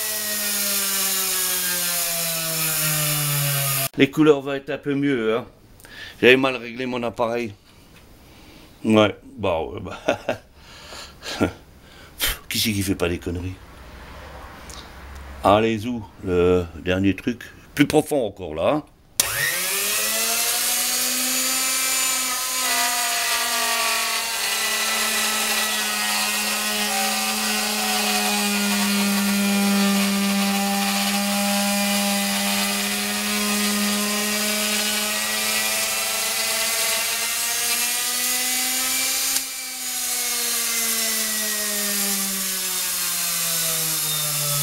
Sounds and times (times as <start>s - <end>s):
Speech: 4.0s - 5.5s, 6.2s - 7.6s, 8.8s - 10.1s, 12.2s - 13.6s, 15.4s - 18.9s.